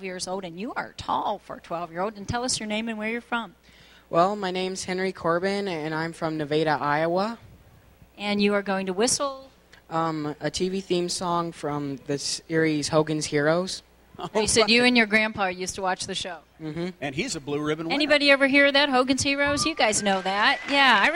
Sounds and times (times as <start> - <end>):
Speech: 14.2 - 15.0.